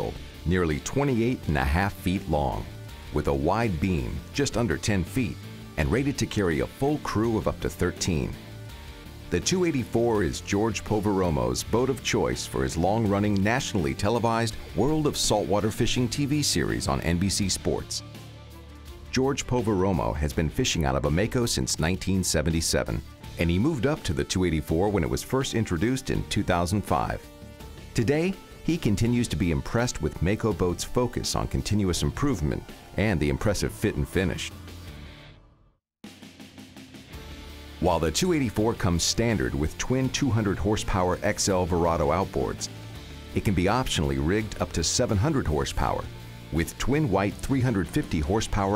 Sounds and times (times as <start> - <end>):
Speech: 0.0 - 8.4, 9.3 - 18.1, 19.1 - 27.2, 28.0 - 34.6, 37.8 - 42.7, 43.4 - 48.7
Music: 0.0 - 48.7.